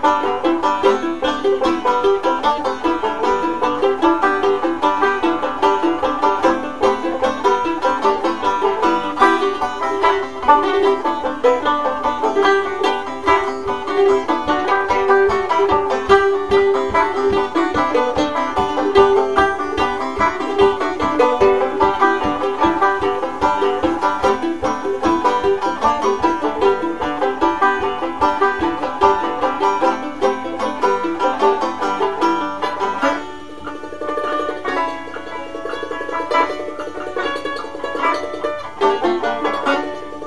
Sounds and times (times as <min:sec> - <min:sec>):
Banjo: 0:00.0 - 0:40.2
Country: 0:00.0 - 0:40.2
Guitar: 0:00.0 - 0:40.2.